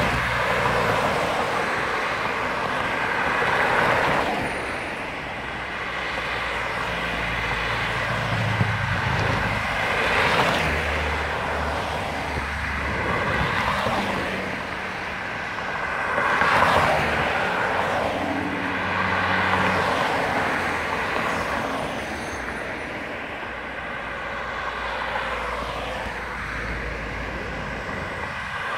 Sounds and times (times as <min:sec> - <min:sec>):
Car: 0:00.0 - 0:28.7.